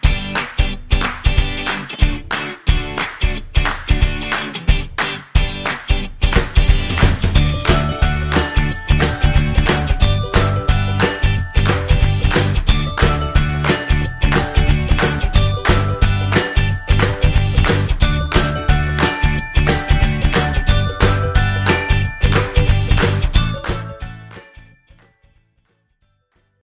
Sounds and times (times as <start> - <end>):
Music: 0.0 - 26.6.